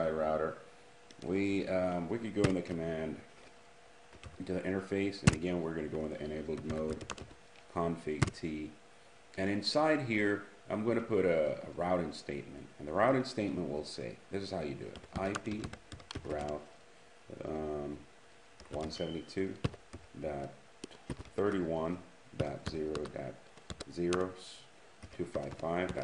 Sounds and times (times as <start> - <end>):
Speech: 0.0 - 3.3, 4.4 - 7.1, 7.7 - 8.8, 9.4 - 16.7, 17.3 - 18.1, 18.7 - 20.6, 21.4 - 26.0
Inside, small room: 0.0 - 26.0.